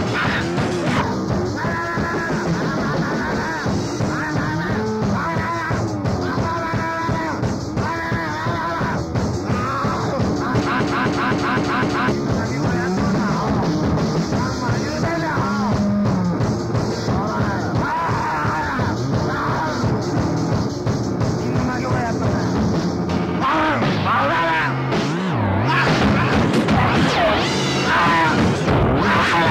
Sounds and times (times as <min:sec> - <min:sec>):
Speech: 0:00.0 - 0:13.7, 0:14.3 - 0:15.9, 0:16.9 - 0:20.0, 0:21.4 - 0:22.7, 0:23.4 - 0:24.8, 0:25.6 - 0:29.5
Music: 0:00.0 - 0:29.5.